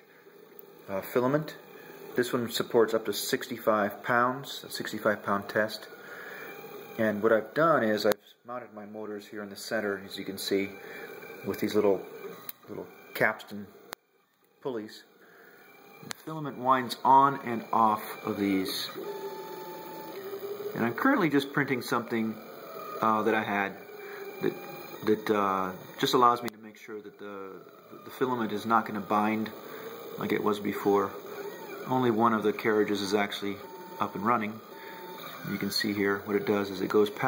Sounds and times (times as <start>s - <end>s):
Speech: 0.9s - 1.6s, 2.2s - 6.0s, 7.0s - 10.8s, 11.4s - 12.0s, 12.6s - 13.7s, 14.6s - 15.1s, 16.1s - 19.0s, 20.8s - 22.4s, 23.0s - 23.8s, 24.4s - 29.6s, 30.2s - 31.2s, 31.8s - 34.6s, 35.4s - 37.2s.